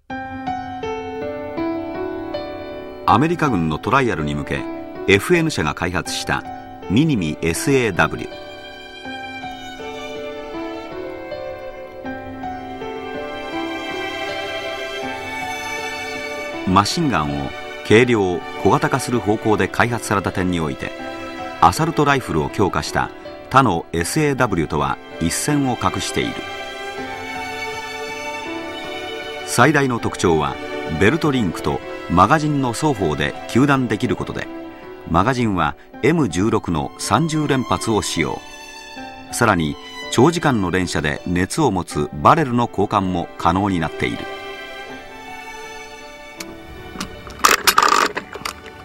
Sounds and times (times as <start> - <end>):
Music: 0.0 - 48.8
Speech: 3.1 - 8.3, 16.7 - 20.9, 21.6 - 26.4, 29.5 - 34.5, 35.1 - 38.4, 39.4 - 44.3.